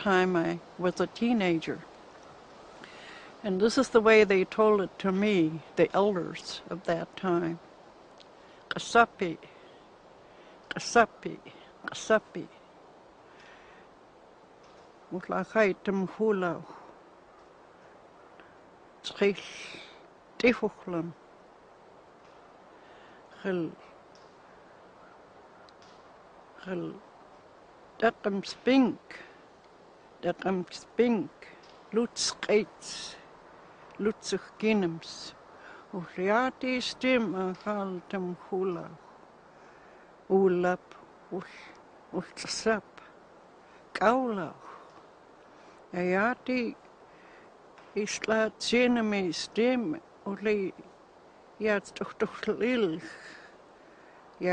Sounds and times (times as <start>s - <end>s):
Speech: 0.0s - 1.9s, 3.4s - 7.6s, 8.7s - 9.5s, 10.7s - 12.6s, 15.1s - 16.8s, 19.1s - 21.2s, 23.4s - 23.8s, 26.6s - 27.0s, 28.0s - 29.3s, 30.2s - 33.2s, 34.0s - 39.0s, 40.3s - 42.9s, 44.0s - 44.7s, 45.9s - 46.8s, 48.0s - 50.8s, 51.6s - 53.4s.